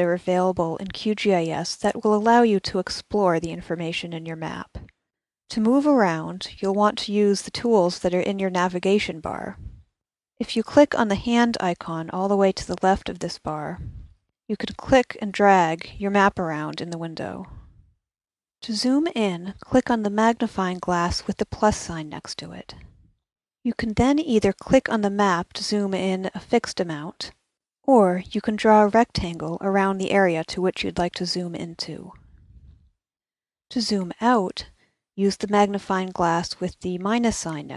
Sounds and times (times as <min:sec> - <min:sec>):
Speech: 0:00.0 - 0:04.9, 0:05.5 - 0:09.7, 0:10.4 - 0:13.9, 0:14.5 - 0:17.6, 0:18.6 - 0:22.8, 0:23.7 - 0:27.3, 0:27.9 - 0:32.2, 0:33.7 - 0:37.7.